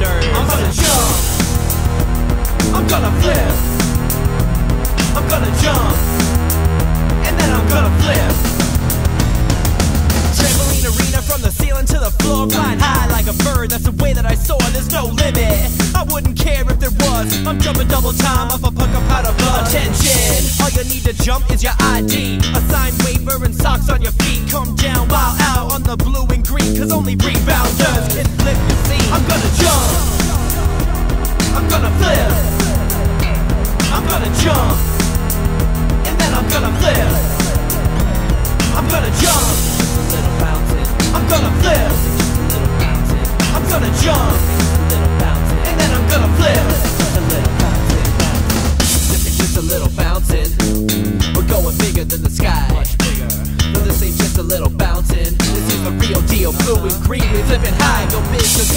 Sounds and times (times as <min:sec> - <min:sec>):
Music: 0:00.0 - 0:58.7.